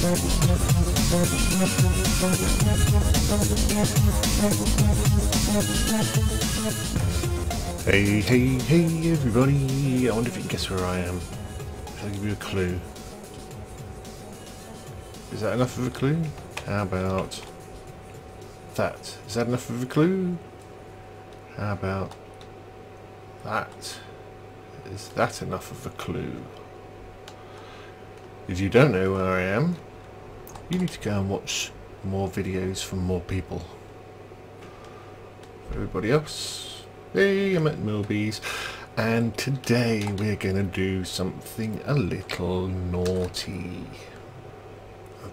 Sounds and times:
Speech: 7.9 - 11.3, 12.0 - 12.9, 15.3 - 17.5, 18.8 - 20.4, 21.5 - 22.2, 23.4 - 24.2, 24.8 - 26.6, 28.5 - 29.8, 30.7 - 33.8, 35.7 - 38.4, 39.0 - 44.2.

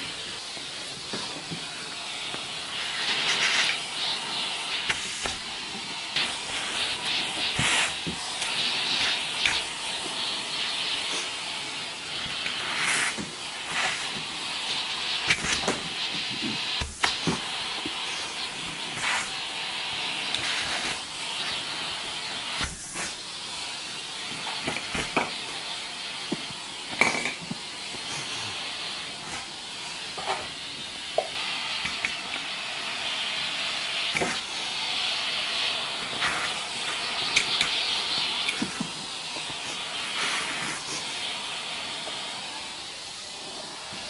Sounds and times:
Vacuum cleaner: 0.0 - 44.0.

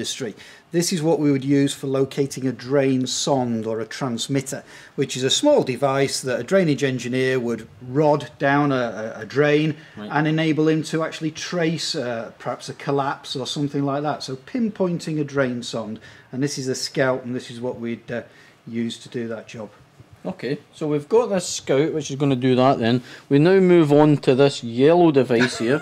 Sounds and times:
Speech: 0.0 - 25.8.

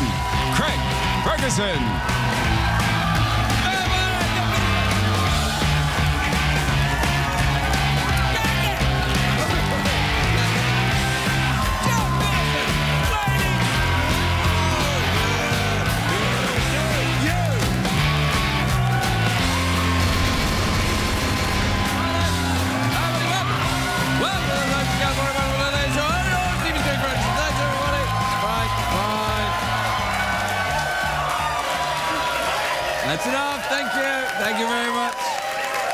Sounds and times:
Music: 0.0 - 35.9.

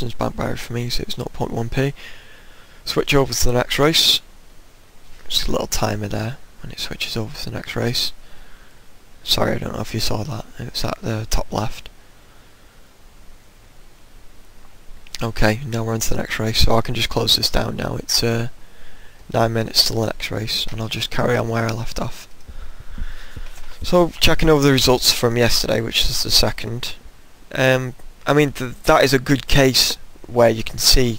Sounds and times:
Speech: 0.0 - 2.0, 2.9 - 4.3, 5.2 - 8.2, 9.2 - 11.9, 15.1 - 18.6, 19.3 - 22.3, 23.8 - 31.1.

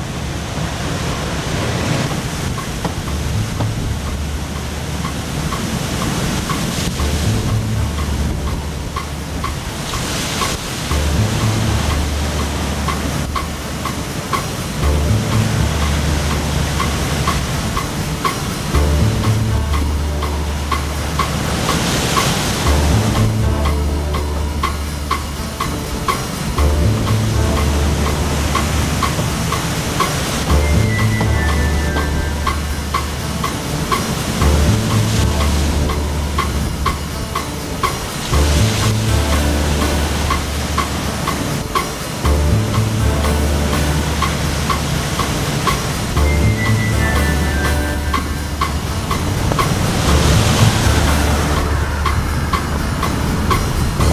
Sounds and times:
Boat, Water vehicle: 0.0 - 54.1
Music: 0.0 - 54.1.

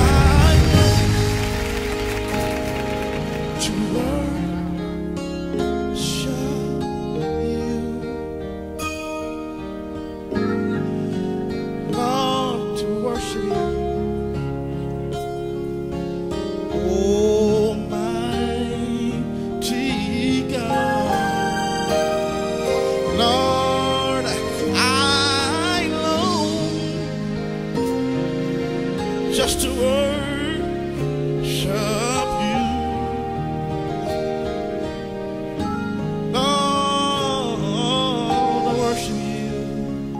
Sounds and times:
Music: 0.0 - 40.1.

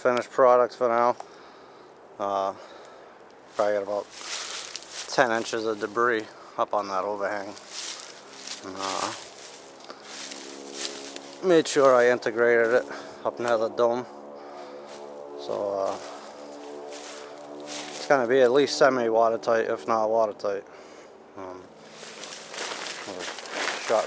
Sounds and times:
Speech: 0.0 - 1.2, 2.2 - 2.6, 3.6 - 4.1, 5.1 - 7.6, 8.6 - 9.2, 11.4 - 14.1, 15.4 - 16.2, 17.9 - 20.7, 21.4 - 21.7, 23.0 - 24.0
Outside, rural or natural: 0.0 - 24.0.

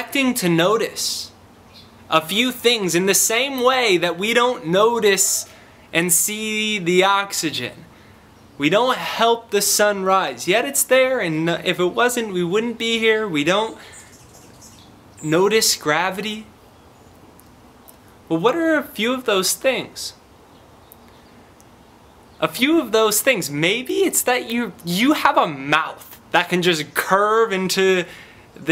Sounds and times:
Speech: 0.0 - 1.4, 2.1 - 7.9, 8.6 - 13.8, 15.2 - 16.5, 18.3 - 20.2, 22.4 - 28.7.

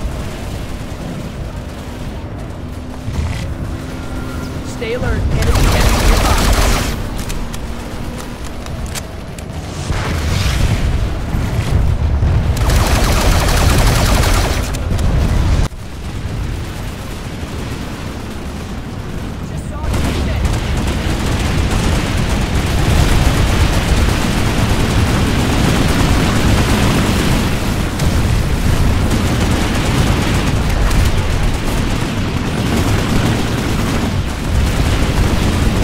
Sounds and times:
Speech: 4.6 - 6.6, 19.4 - 20.4.

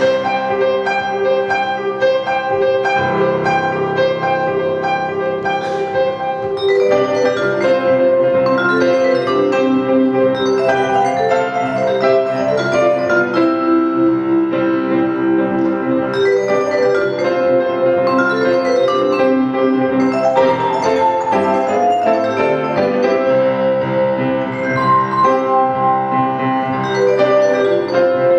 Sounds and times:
Marimba, xylophone: 0.0 - 28.3
Piano: 0.0 - 28.3
Vibraphone: 0.0 - 28.3.

